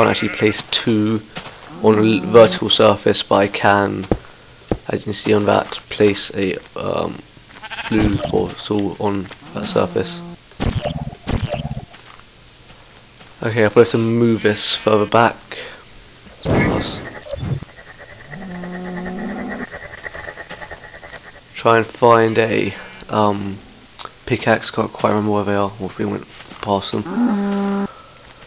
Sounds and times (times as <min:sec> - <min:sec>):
Speech: 0:00.0 - 0:04.1, 0:04.9 - 0:07.3, 0:07.9 - 0:10.3, 0:13.4 - 0:15.5, 0:16.4 - 0:17.1, 0:21.6 - 0:23.6, 0:24.3 - 0:27.2
Outside, rural or natural: 0:00.0 - 0:28.4.